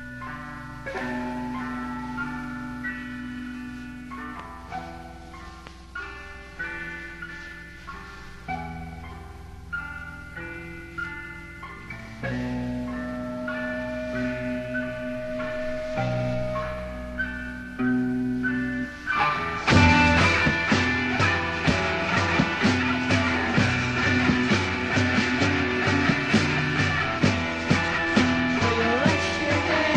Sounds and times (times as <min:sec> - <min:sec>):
Music: 0:00.0 - 0:29.9.